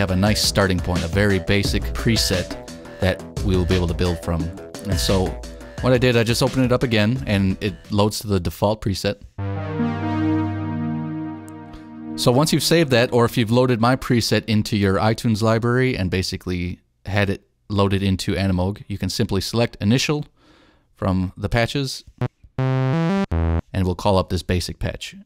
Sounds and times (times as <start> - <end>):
Music: 0.0 - 8.0, 9.4 - 14.8, 22.6 - 23.6
Speech: 0.0 - 9.3, 12.2 - 20.3, 21.0 - 22.1, 23.7 - 25.2.